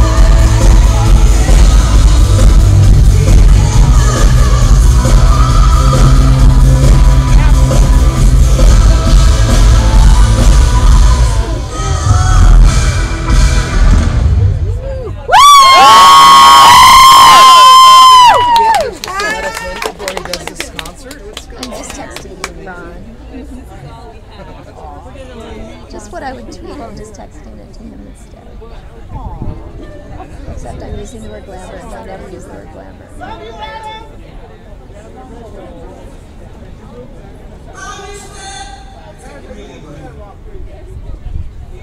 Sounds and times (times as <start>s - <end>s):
Crowd: 0.0s - 41.8s
Applause: 18.1s - 22.6s.